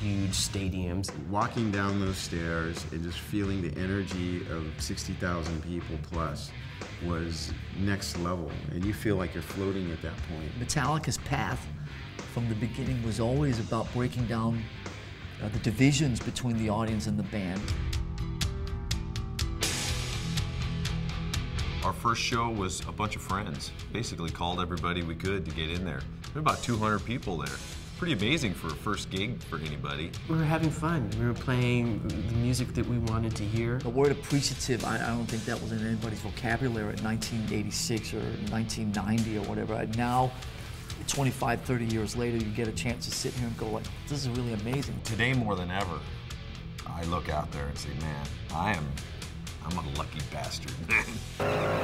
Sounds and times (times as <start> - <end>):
Speech: 0.0 - 11.7, 12.3 - 14.7, 15.4 - 17.8, 21.8 - 40.4, 41.0 - 46.2, 46.8 - 51.3
Rock and roll: 0.0 - 51.8.